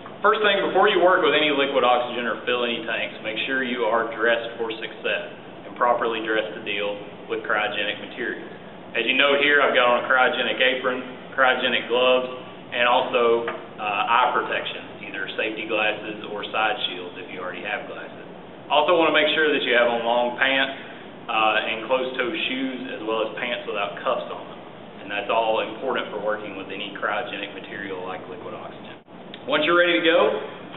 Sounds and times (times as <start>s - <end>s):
Speech: 0.2s - 30.6s.